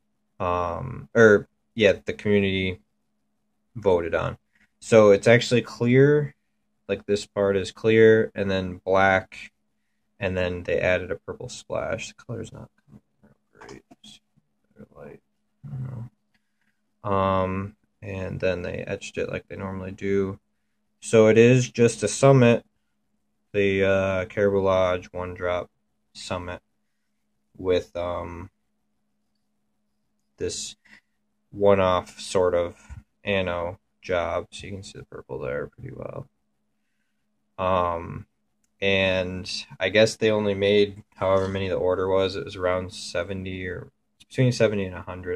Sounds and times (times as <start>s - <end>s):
Inside, small room: 0.0s - 45.3s
Speech: 0.4s - 2.9s, 3.8s - 9.5s, 10.2s - 12.8s, 13.6s - 16.1s, 17.0s - 20.4s, 21.0s - 22.7s, 23.5s - 26.6s, 27.6s - 28.5s, 30.4s - 30.8s, 31.6s - 36.3s, 37.6s - 45.3s.